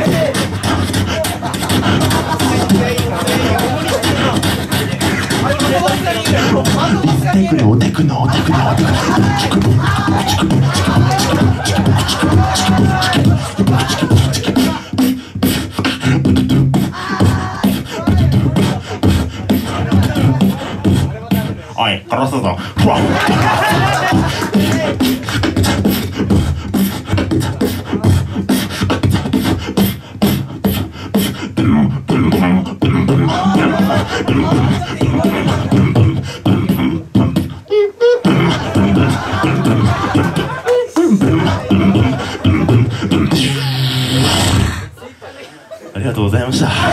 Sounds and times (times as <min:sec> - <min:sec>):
Beatboxing: 0:00.0 - 0:45.0, 0:46.1 - 0:46.9.